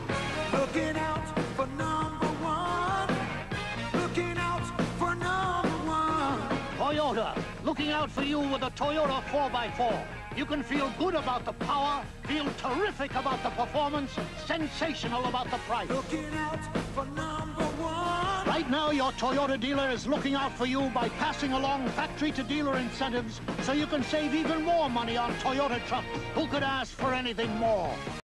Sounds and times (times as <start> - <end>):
Music: 0.0 - 28.2
Speech: 6.8 - 16.3, 18.4 - 28.0.